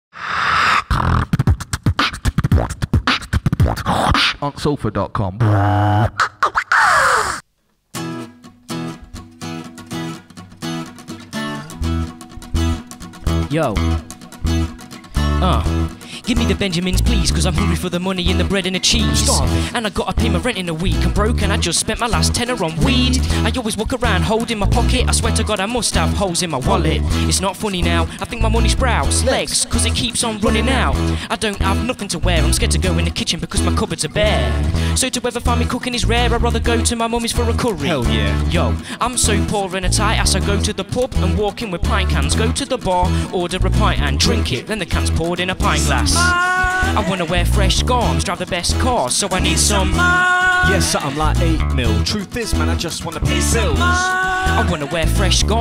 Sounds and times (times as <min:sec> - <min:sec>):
Beatboxing: 0:00.2 - 0:07.4, 0:12.5 - 0:55.6
Speech: 0:04.4 - 0:05.4, 0:13.5 - 0:13.8, 0:15.4 - 0:21.4, 0:26.6 - 0:27.0, 0:37.4 - 0:46.3, 0:47.0 - 0:55.6.